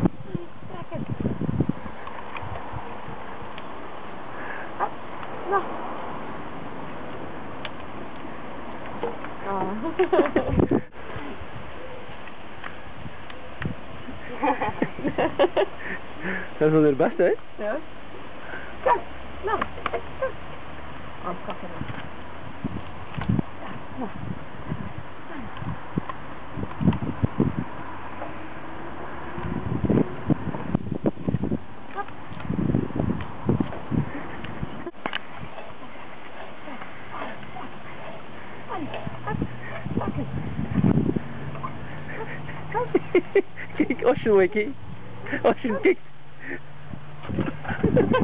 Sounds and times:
Speech: 45.4 - 46.0.

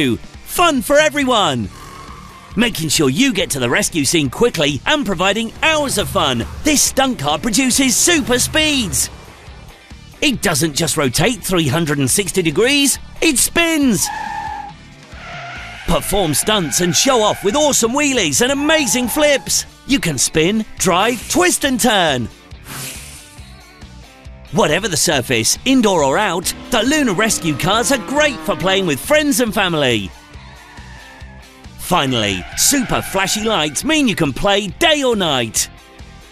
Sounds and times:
Speech: 0.0 - 1.7, 2.6 - 9.1, 10.2 - 14.2, 15.9 - 22.3, 24.5 - 30.1, 31.8 - 35.7
Car: 0.0 - 22.5, 23.9 - 36.3
Music: 0.0 - 36.3.

